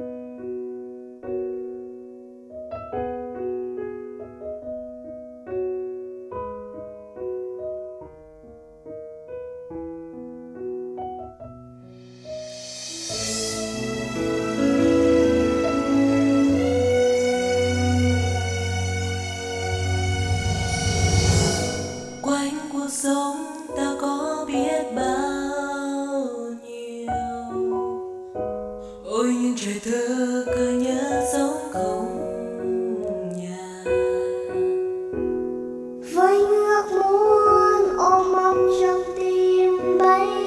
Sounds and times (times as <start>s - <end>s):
Lullaby: 22.2s - 35.3s, 36.0s - 40.4s.